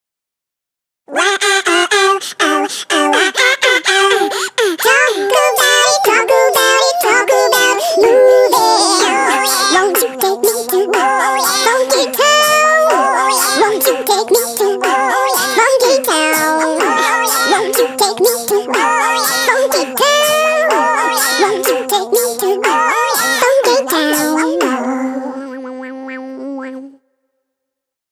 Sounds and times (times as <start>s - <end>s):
Music: 3.8s - 24.9s.